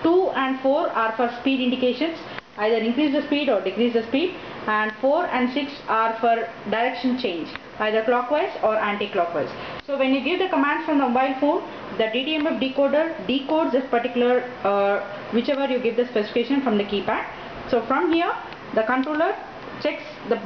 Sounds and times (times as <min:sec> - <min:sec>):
Speech: 0:00.0 - 0:20.4.